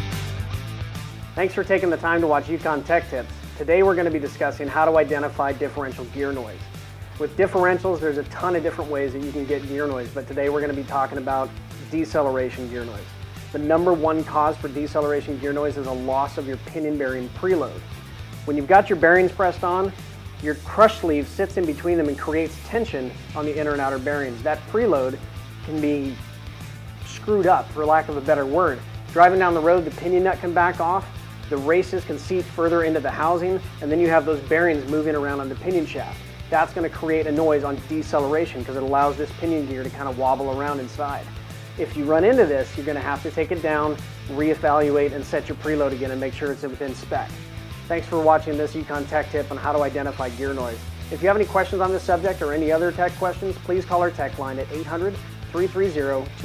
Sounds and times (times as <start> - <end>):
Music: 0.0 - 56.4
Speech: 1.4 - 17.8, 18.5 - 26.2, 27.0 - 56.4.